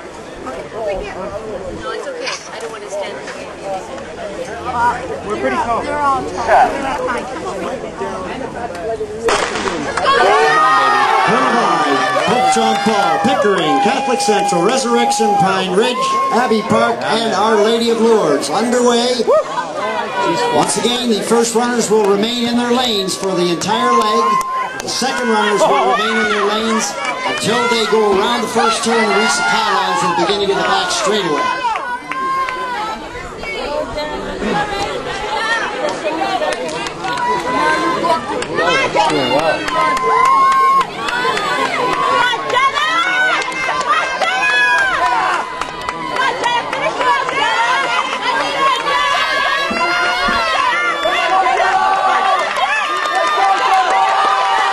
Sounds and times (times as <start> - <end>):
Chatter: 0.0 - 54.7
Run: 19.2 - 54.7.